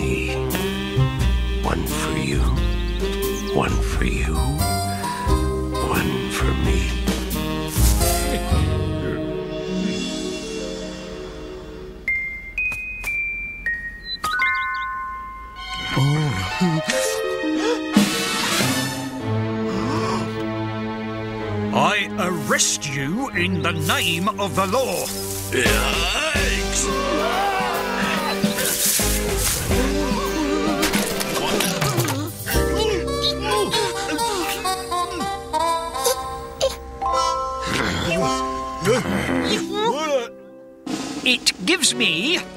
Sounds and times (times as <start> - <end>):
Music: 0.0 - 42.5.